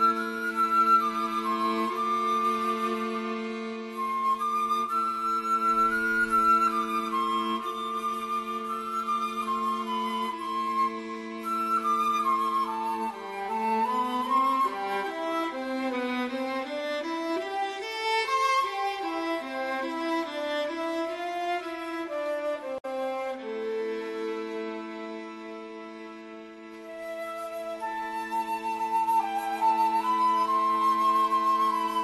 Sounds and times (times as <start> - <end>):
Cello: 0.0 - 32.0.